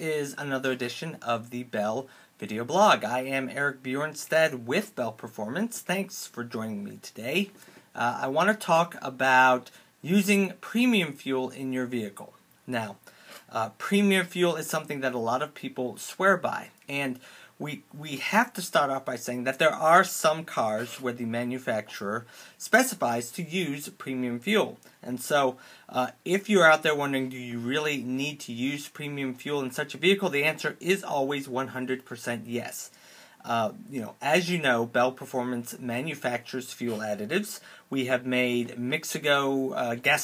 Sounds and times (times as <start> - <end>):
Speech: 0.0 - 40.2.